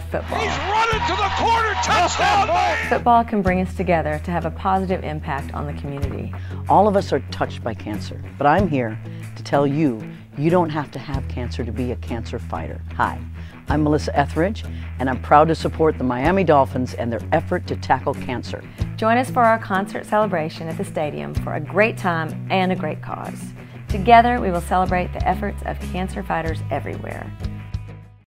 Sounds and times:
Speech: 0:00.0 - 0:27.3
Music: 0:00.0 - 0:28.2.

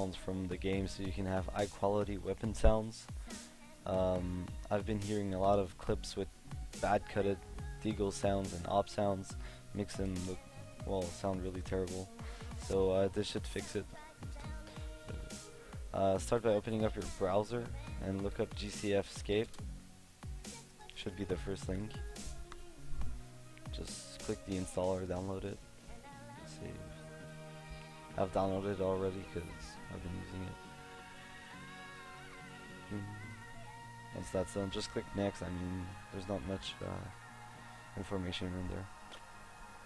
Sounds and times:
Speech: 0:00.0 - 0:03.1, 0:03.9 - 0:14.0, 0:16.0 - 0:19.5, 0:20.9 - 0:22.0, 0:23.7 - 0:25.6, 0:26.4 - 0:26.9, 0:28.2 - 0:30.6, 0:34.2 - 0:37.1, 0:38.0 - 0:38.9
Music: 0:00.0 - 0:39.8.

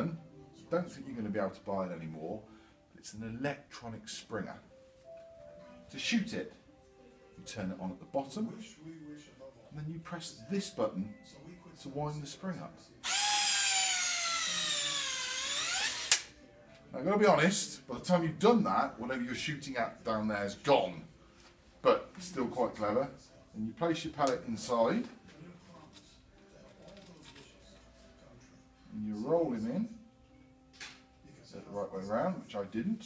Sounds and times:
Speech: 0:00.0 - 0:02.4, 0:07.4 - 0:13.0, 0:16.9 - 0:21.1, 0:21.8 - 0:30.1, 0:31.2 - 0:33.0
Inside, small room: 0:00.0 - 0:33.0.

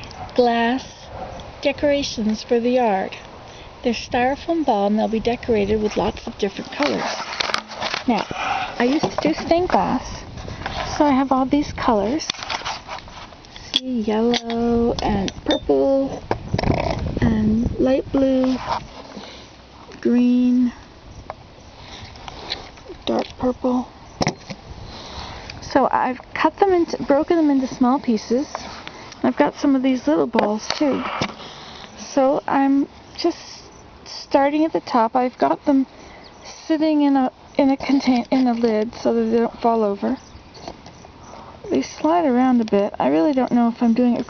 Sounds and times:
Speech: 0:01.6 - 0:03.2, 0:03.8 - 0:07.2, 0:08.8 - 0:10.2, 0:10.9 - 0:12.3, 0:13.8 - 0:16.2, 0:17.2 - 0:18.6, 0:19.9 - 0:20.8, 0:22.9 - 0:23.9, 0:25.6 - 0:28.6, 0:29.2 - 0:31.1, 0:32.0 - 0:40.2, 0:41.7 - 0:44.2.

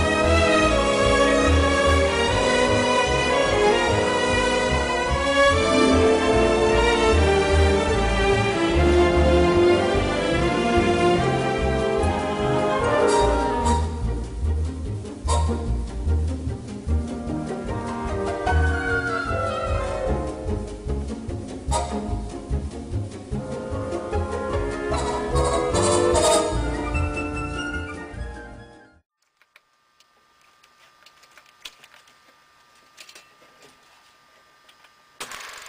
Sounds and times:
Music: 0:00.0 - 0:29.0.

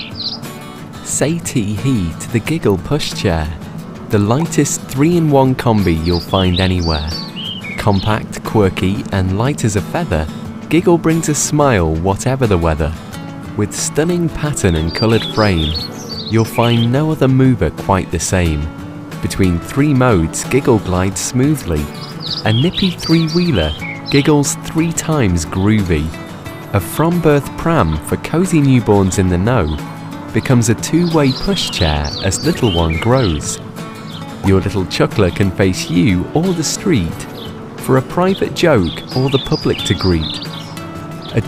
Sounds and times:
Music: 0:00.0 - 0:41.4
Speech: 0:01.0 - 0:07.2, 0:07.8 - 0:13.0, 0:13.6 - 0:29.8, 0:30.4 - 0:33.6, 0:34.4 - 0:40.4.

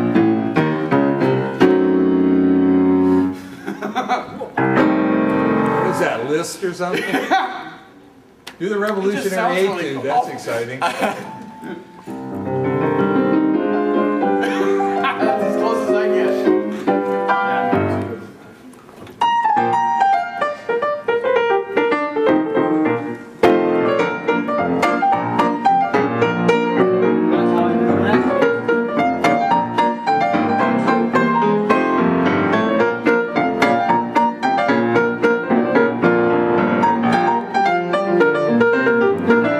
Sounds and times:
Music: 0:00.0 - 0:03.6, 0:04.6 - 0:06.3, 0:11.3 - 0:18.4, 0:19.0 - 0:39.6
Speech: 0:08.6 - 0:10.9, 0:15.2 - 0:16.5.

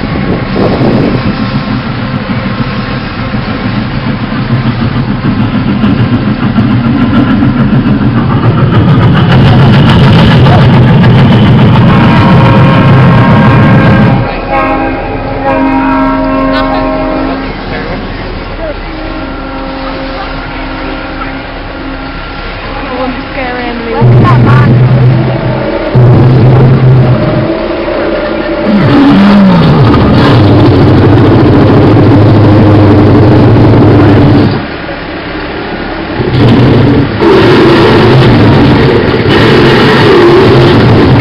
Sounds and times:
Train horn: 0:11.8 - 0:18.0, 0:18.8 - 0:24.7.

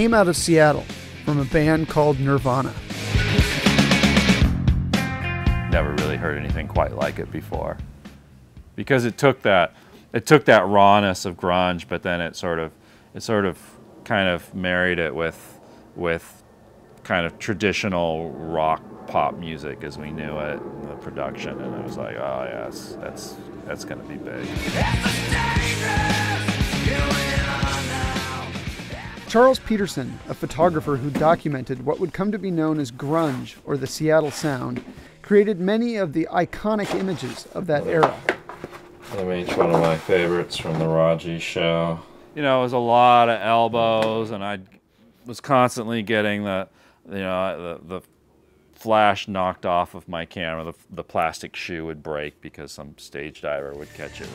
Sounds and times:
Speech: 0:00.0 - 0:02.8, 0:05.7 - 0:07.8, 0:08.8 - 0:16.4, 0:17.0 - 0:24.9, 0:29.3 - 0:38.2, 0:39.1 - 0:44.7, 0:45.3 - 0:48.1, 0:48.8 - 0:54.3
Grunge: 0:00.0 - 0:08.8, 0:17.0 - 0:43.5.

